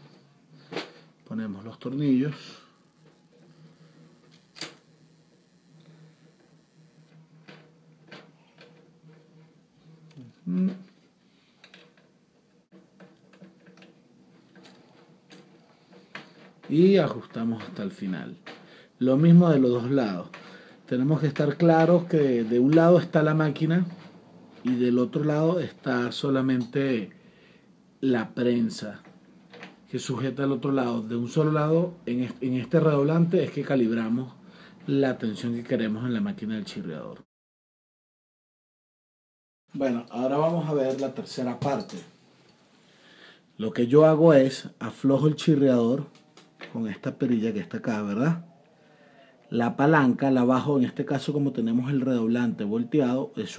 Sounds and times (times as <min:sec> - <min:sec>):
Speech: 0:01.2 - 0:02.7, 0:10.2 - 0:10.9, 0:16.7 - 0:18.4, 0:19.0 - 0:24.0, 0:24.6 - 0:27.2, 0:28.0 - 0:29.1, 0:29.9 - 0:37.3, 0:39.7 - 0:42.1, 0:43.6 - 0:48.5, 0:49.1 - 0:53.5.